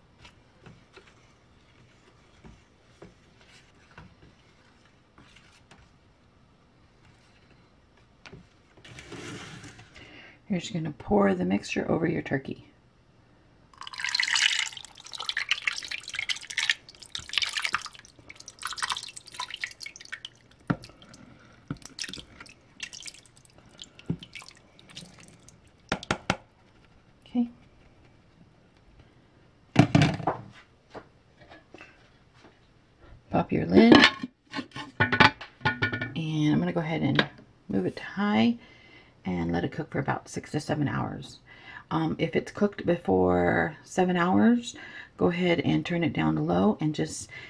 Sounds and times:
Inside, small room: 0.0 - 47.4
Speech: 10.5 - 12.8, 33.3 - 34.1, 36.2 - 38.6, 39.3 - 47.3.

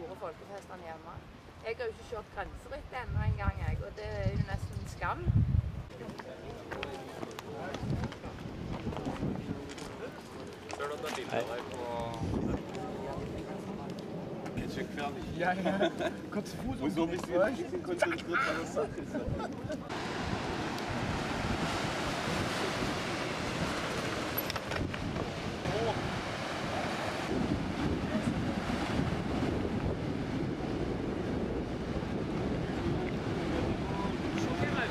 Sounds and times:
Outside, rural or natural: 0.0 - 34.9.

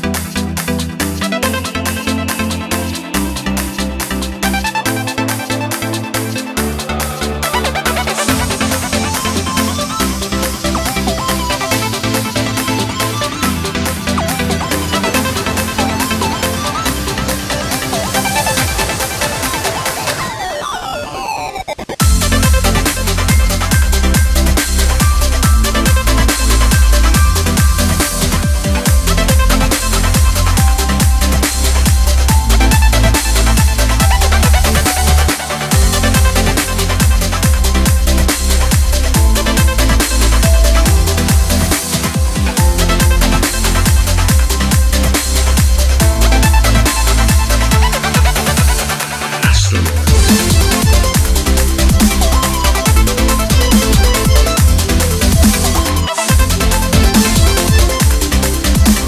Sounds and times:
Drum and bass: 0.0 - 59.0
Trance music: 0.0 - 59.0.

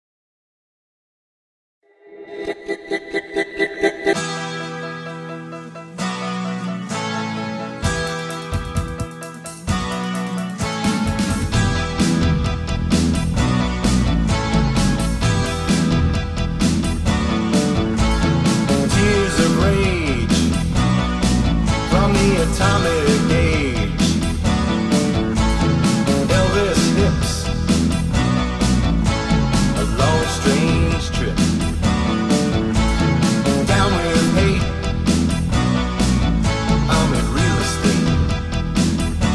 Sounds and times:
Music: 1.8 - 39.3.

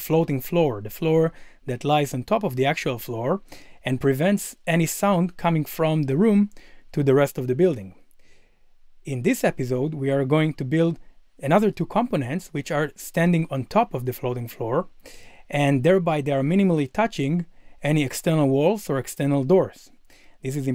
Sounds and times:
Speech: 0.0 - 8.0, 9.1 - 14.9, 15.5 - 20.7.

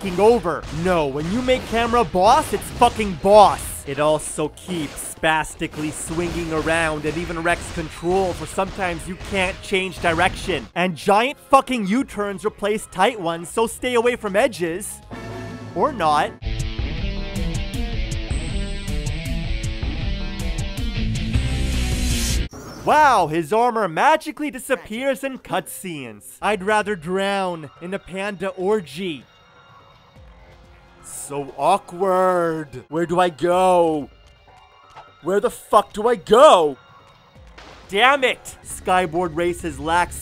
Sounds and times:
Speech: 0.0 - 15.0, 15.8 - 16.4, 22.8 - 29.2, 31.1 - 34.1, 35.2 - 36.8, 37.9 - 40.2.

